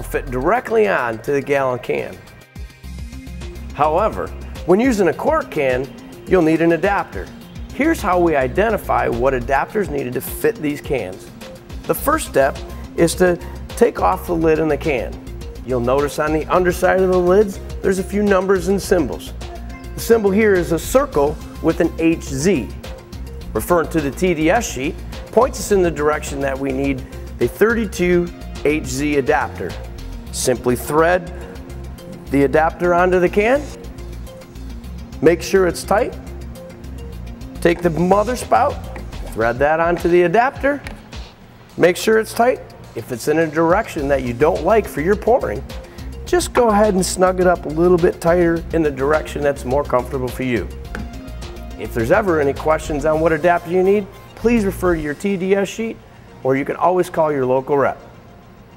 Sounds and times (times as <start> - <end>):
Speech: 0.0 - 2.2, 3.8 - 11.2, 11.9 - 19.3, 20.0 - 22.7, 23.6 - 29.8, 30.4 - 31.4, 32.3 - 33.8, 35.2 - 36.2, 37.6 - 40.9, 41.8 - 45.6, 46.3 - 50.7, 51.8 - 58.0
Music: 0.0 - 58.7.